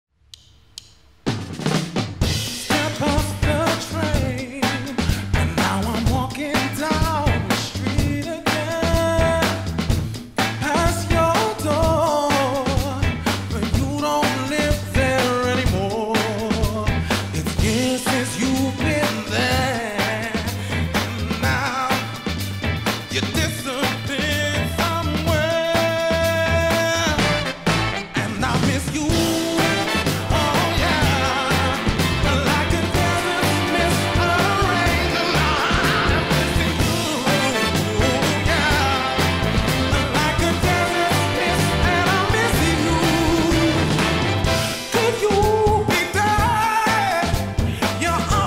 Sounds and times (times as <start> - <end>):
Bass drum: 1.3 - 48.4
Singing: 2.6 - 9.7, 10.6 - 20.6, 28.2 - 48.4.